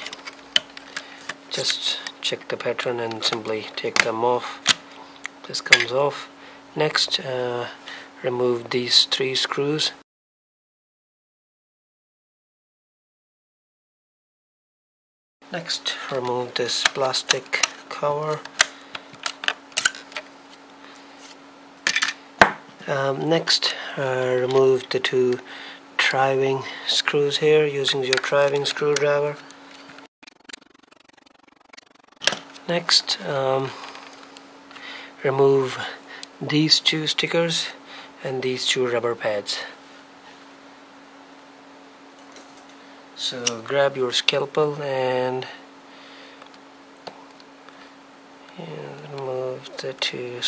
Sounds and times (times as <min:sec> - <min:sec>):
Speech: 0:01.5 - 0:04.7, 0:05.4 - 0:10.0, 0:15.5 - 0:18.5, 0:22.8 - 0:29.4, 0:32.7 - 0:33.8, 0:35.2 - 0:39.8, 0:43.2 - 0:45.6, 0:48.5 - 0:50.4.